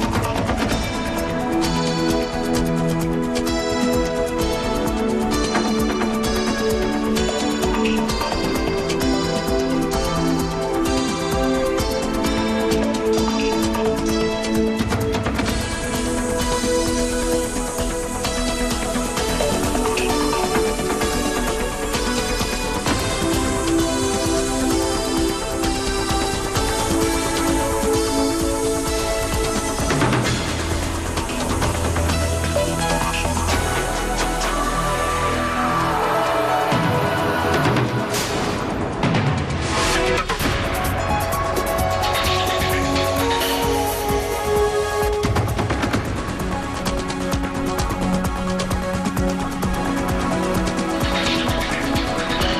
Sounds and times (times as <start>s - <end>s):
Music: 0.0s - 52.5s.